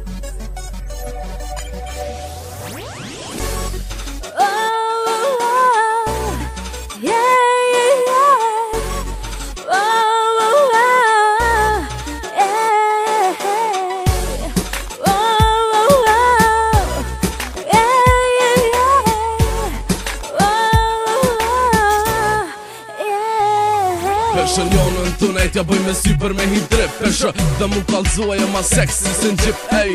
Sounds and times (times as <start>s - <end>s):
Music: 0.0s - 29.9s.